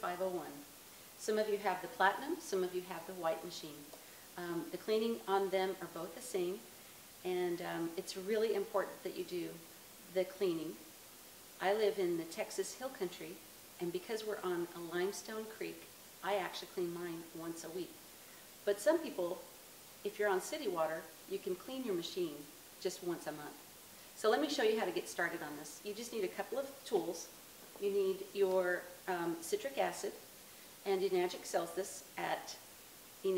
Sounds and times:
Speech: 0:00.0 - 0:10.9, 0:11.6 - 0:18.0, 0:18.6 - 0:23.6, 0:24.2 - 0:30.2, 0:30.9 - 0:32.6.

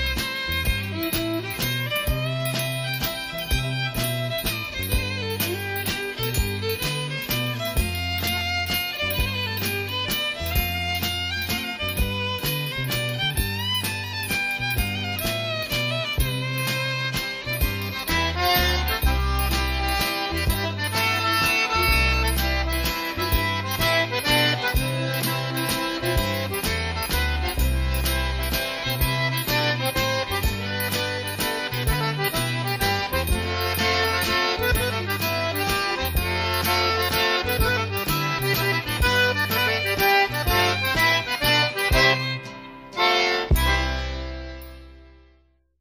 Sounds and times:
Accordion: 0:00.0 - 0:45.5.

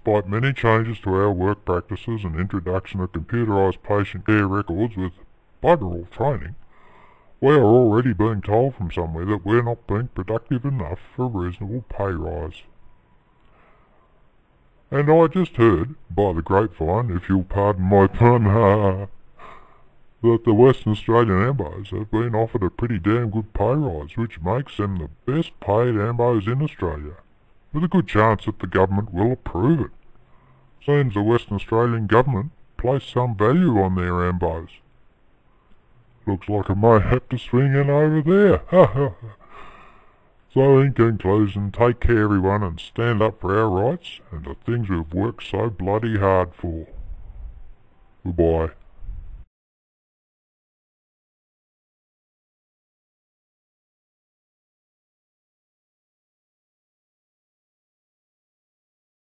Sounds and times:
Speech: 0:00.0 - 0:06.6, 0:07.4 - 0:12.7, 0:14.9 - 0:19.2, 0:20.2 - 0:30.0, 0:30.8 - 0:34.9, 0:36.2 - 0:39.4, 0:40.5 - 0:47.1, 0:48.2 - 0:48.8.

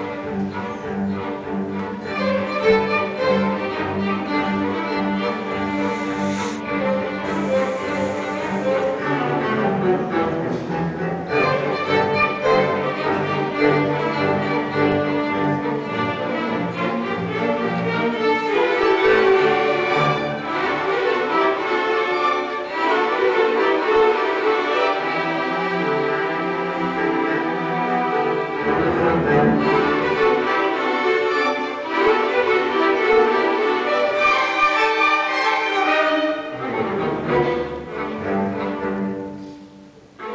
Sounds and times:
Orchestra: 0:00.0 - 0:40.3.

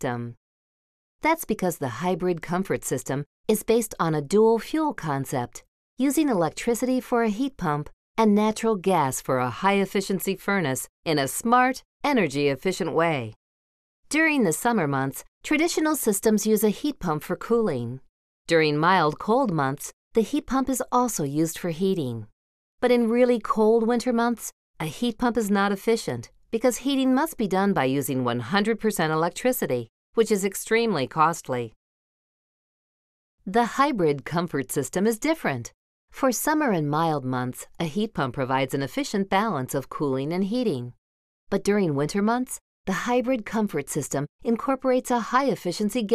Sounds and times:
Speech: 0:00.0 - 0:00.4, 0:01.2 - 0:13.4, 0:14.1 - 0:31.8, 0:33.5 - 0:46.1.

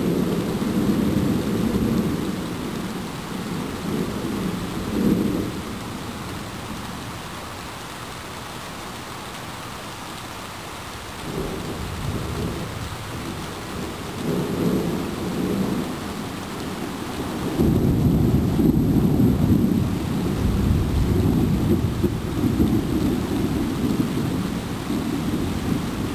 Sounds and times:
Rain: 0:00.0 - 0:26.1.

